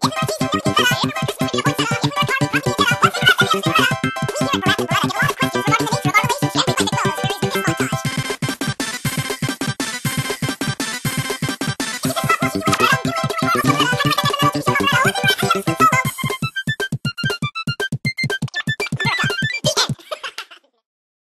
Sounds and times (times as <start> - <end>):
Music: 0.0 - 20.0.